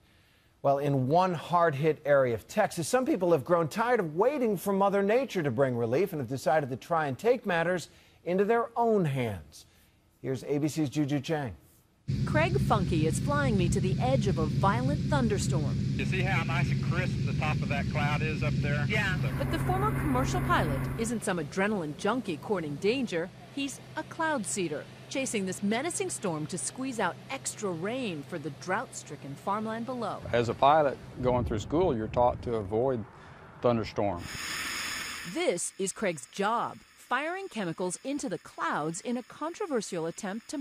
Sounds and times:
Speech: 0:00.7 - 0:11.6, 0:12.3 - 0:33.0, 0:33.6 - 0:34.2.

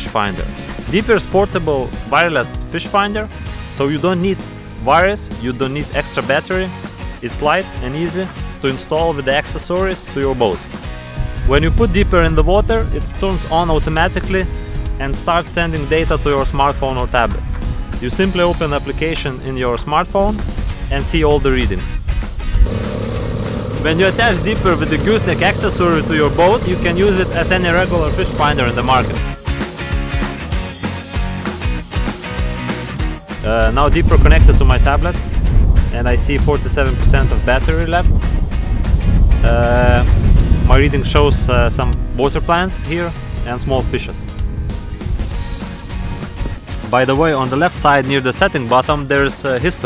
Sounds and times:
Speech: 0:00.0 - 0:10.6, 0:11.5 - 0:17.4, 0:18.0 - 0:22.0, 0:23.8 - 0:29.2, 0:33.4 - 0:35.2, 0:35.9 - 0:38.1, 0:39.4 - 0:40.1, 0:40.7 - 0:44.2, 0:46.8 - 0:49.8
Music: 0:00.0 - 0:49.8.

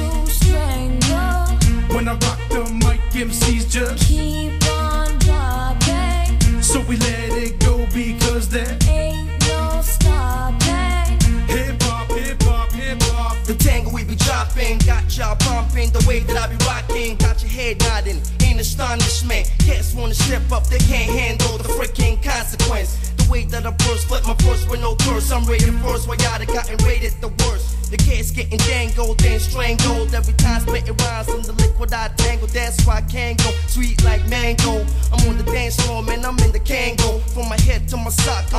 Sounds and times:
Music: 0:00.0 - 0:38.5.

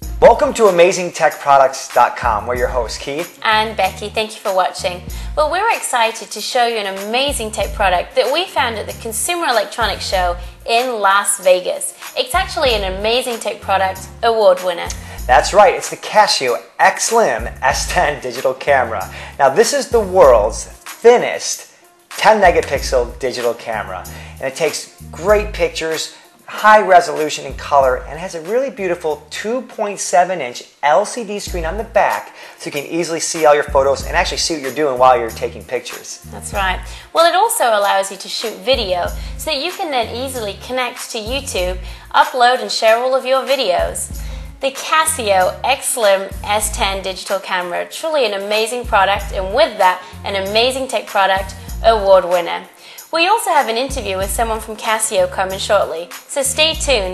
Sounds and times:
Music: 0:00.0 - 0:57.1
Speech: 0:00.2 - 0:21.6, 0:22.2 - 0:57.1.

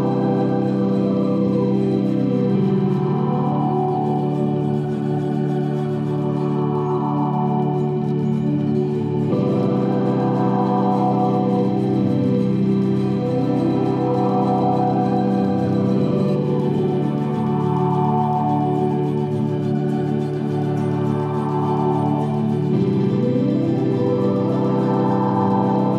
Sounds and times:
Music: 0:00.0 - 0:25.9.

